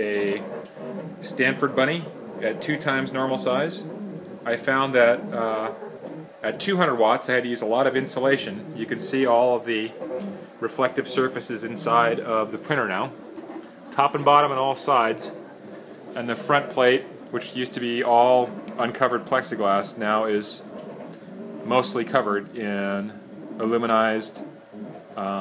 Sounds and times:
Speech: 0:00.0 - 0:00.5, 0:01.2 - 0:03.8, 0:04.5 - 0:05.8, 0:06.4 - 0:10.0, 0:10.6 - 0:13.2, 0:14.0 - 0:15.4, 0:16.2 - 0:20.7, 0:21.7 - 0:24.4, 0:25.2 - 0:25.4.

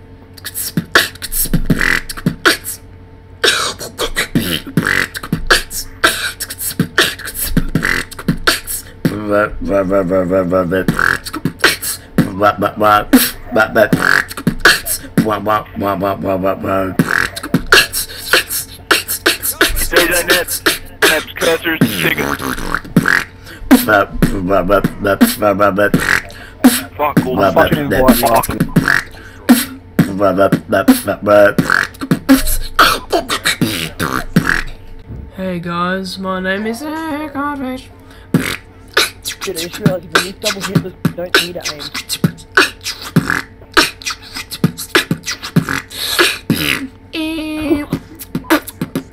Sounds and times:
Beatboxing: 0:00.4 - 0:02.8, 0:03.4 - 0:34.8, 0:38.3 - 0:49.1.

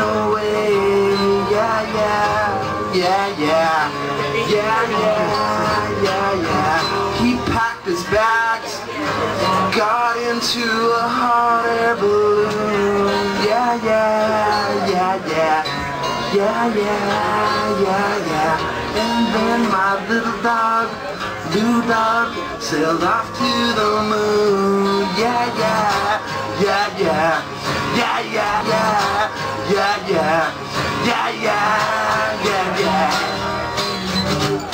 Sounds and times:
Music: 0:00.0 - 0:34.7.

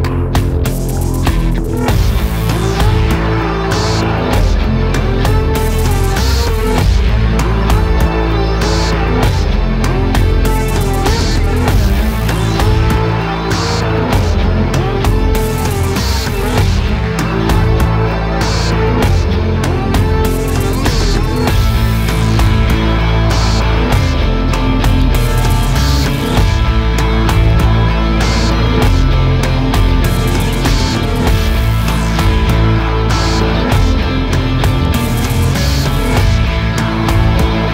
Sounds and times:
Music: 0:00.0 - 0:37.7.

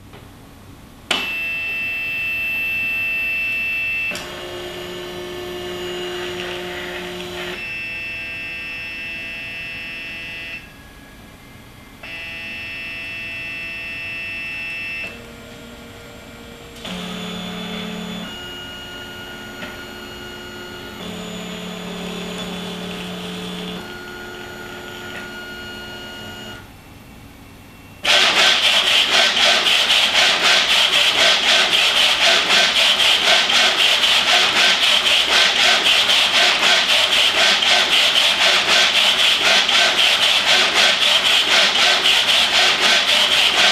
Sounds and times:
Printer: 0:01.1 - 0:26.7, 0:28.0 - 0:43.7.

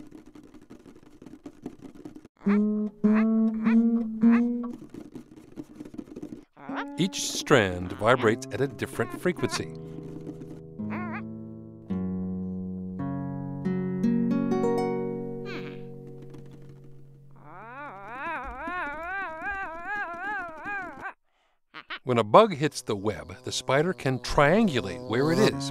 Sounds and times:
Guitar: 0:02.5 - 0:04.9, 0:06.7 - 0:17.4
Speech: 0:07.0 - 0:09.7, 0:22.1 - 0:25.7.

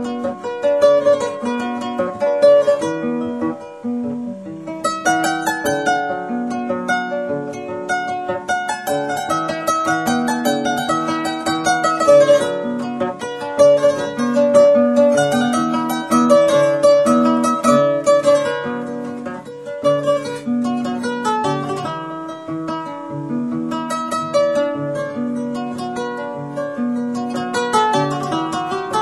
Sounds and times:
Plucked string instrument: 0:00.0 - 0:29.0.

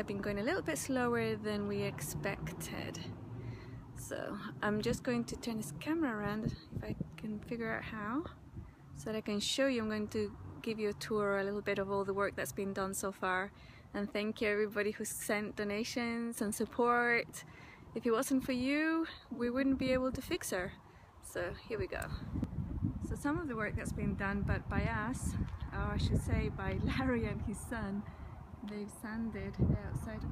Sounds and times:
Speech: 0:00.0 - 0:03.1, 0:04.0 - 0:08.3, 0:09.0 - 0:17.4, 0:23.1 - 0:28.0, 0:28.6 - 0:30.3.

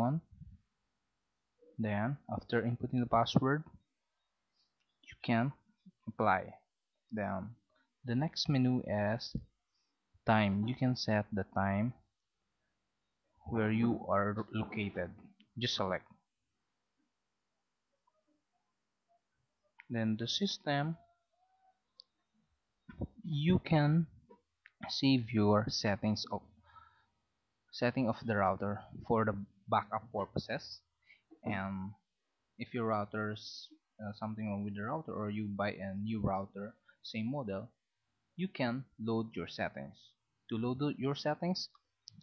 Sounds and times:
Speech: 0:00.0 - 0:00.3, 0:01.8 - 0:03.7, 0:05.1 - 0:06.6, 0:07.2 - 0:09.4, 0:10.3 - 0:12.0, 0:13.5 - 0:16.1, 0:19.9 - 0:21.0, 0:23.0 - 0:24.1, 0:24.8 - 0:26.4, 0:27.7 - 0:32.0, 0:32.6 - 0:37.8, 0:38.4 - 0:41.8.

